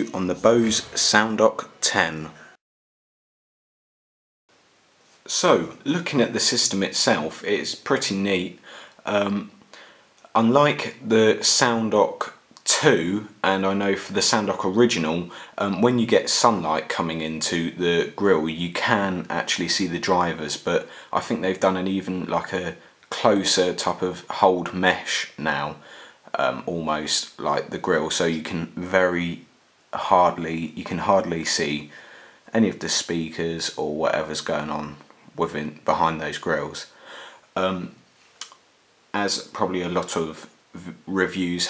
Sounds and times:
Speech: 0:00.0 - 0:02.6, 0:05.2 - 0:09.6, 0:10.2 - 0:41.6.

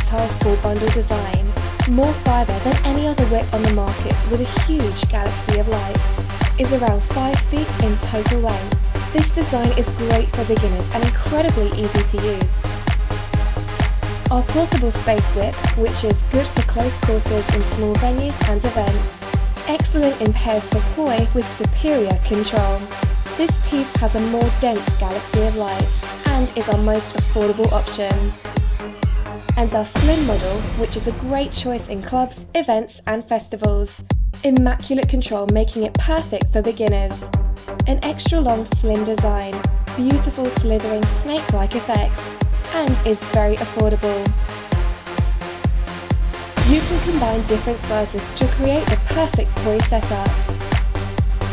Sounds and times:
Speech: 0:00.0 - 0:12.6, 0:14.3 - 0:28.3, 0:29.6 - 0:37.3, 0:37.9 - 0:44.3, 0:46.6 - 0:50.4
Music: 0:00.0 - 0:51.5.

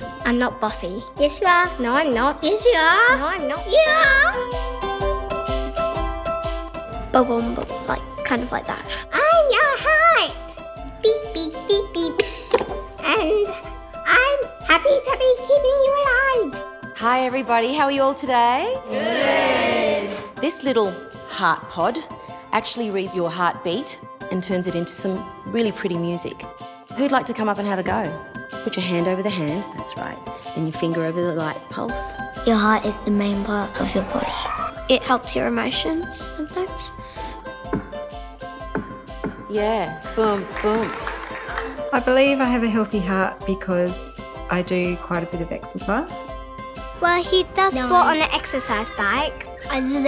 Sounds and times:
Music: 0:00.0 - 0:50.0.

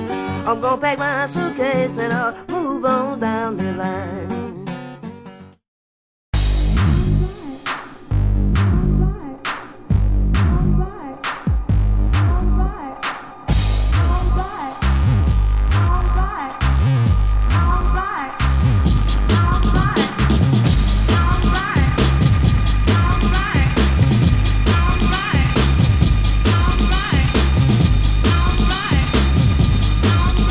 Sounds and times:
Music: 0:00.0 - 0:05.6, 0:06.4 - 0:30.5.

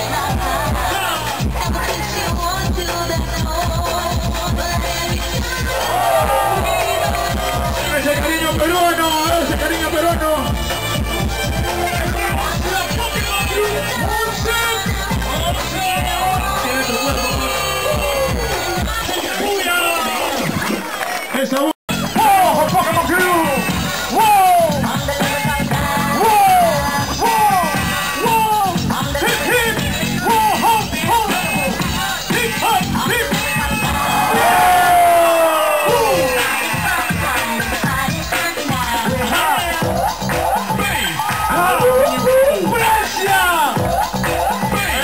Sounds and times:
Music: 0:00.0 - 0:45.0.

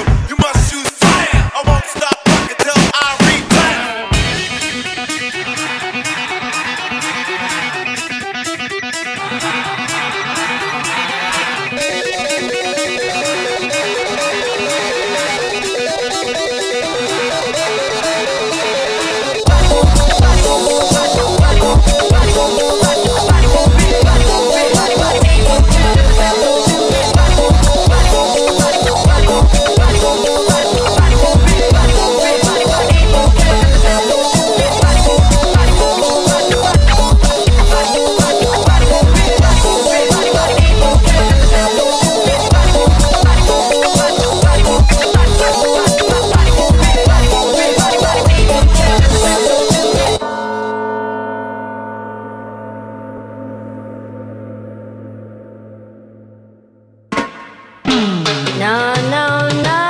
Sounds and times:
Dance music: 0:00.0 - 0:50.2, 0:57.1 - 0:59.8
Electronic music: 0:00.0 - 0:50.7
Scratching (performance technique): 0:00.7 - 0:50.2.

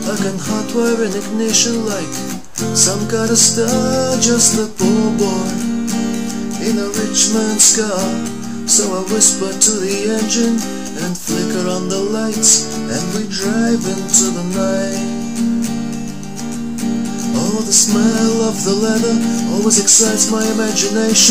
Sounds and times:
Music: 0:00.0 - 0:21.3.

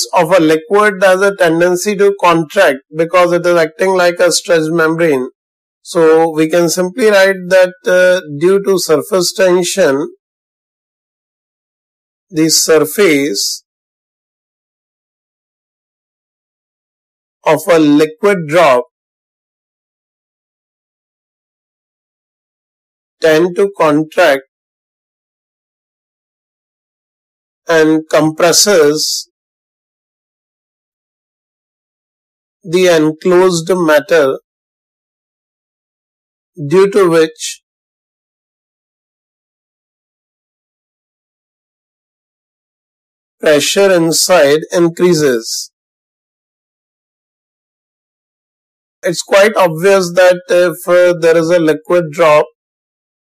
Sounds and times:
Speech: 0:00.0 - 0:10.2, 0:12.4 - 0:13.6, 0:17.5 - 0:19.0, 0:23.2 - 0:24.5, 0:27.7 - 0:29.3, 0:32.7 - 0:34.4, 0:36.6 - 0:37.6, 0:43.4 - 0:45.8, 0:49.1 - 0:52.6.

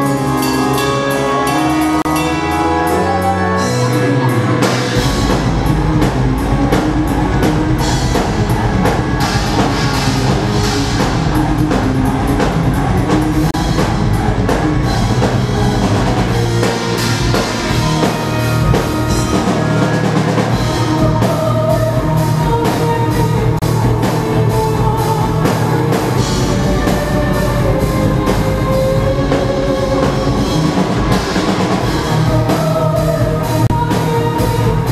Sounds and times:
Music: 0:00.0 - 0:34.9.

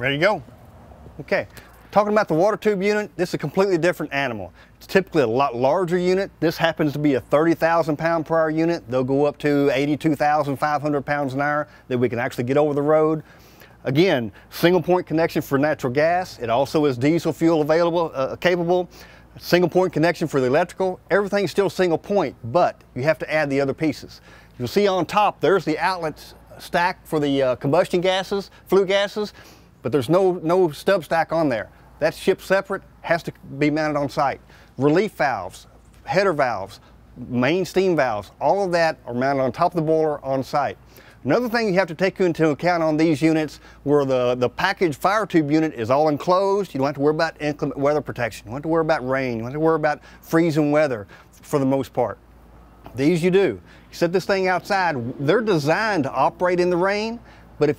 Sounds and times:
Speech: 0:00.0 - 0:00.5, 0:01.2 - 0:13.2, 0:13.8 - 0:52.2, 0:52.9 - 0:57.7.

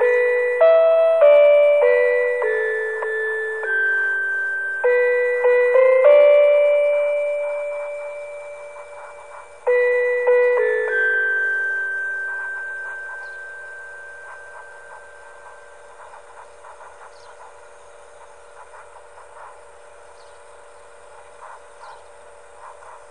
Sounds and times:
Glockenspiel: 0:00.0 - 0:16.0.

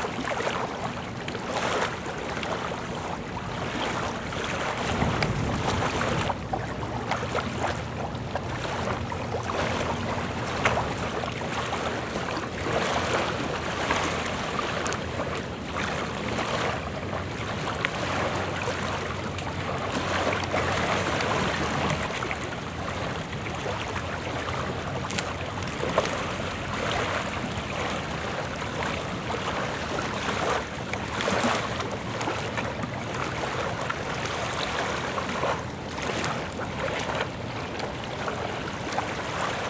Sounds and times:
Rowboat, canoe, kayak: 0:00.0 - 0:39.7.

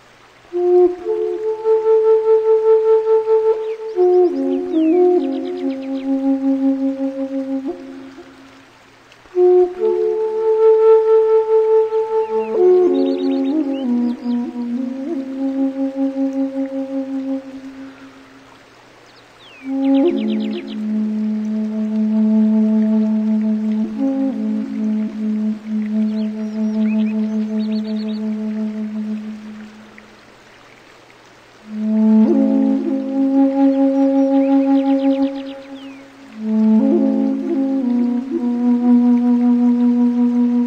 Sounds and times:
Music: 0:00.5 - 0:08.6, 0:09.3 - 0:18.0, 0:19.6 - 0:29.9, 0:31.6 - 0:40.6.

